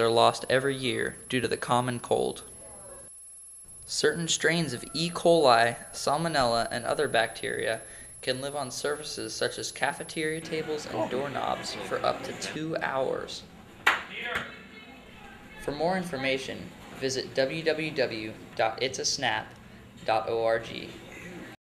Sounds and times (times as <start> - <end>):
Speech: 0.0 - 2.5, 3.9 - 13.5, 15.2 - 21.0
Clapping: 13.8 - 14.5.